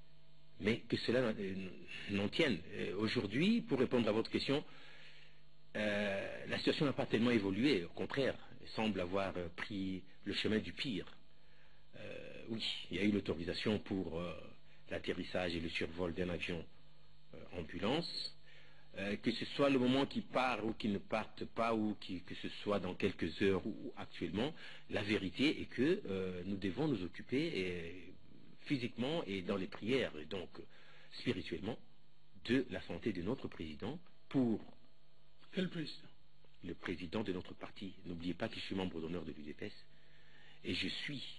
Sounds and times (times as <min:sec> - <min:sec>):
Speech: 0:00.6 - 0:04.7, 0:05.7 - 0:11.2, 0:12.0 - 0:16.7, 0:17.3 - 0:34.8, 0:35.4 - 0:39.9, 0:40.6 - 0:41.3.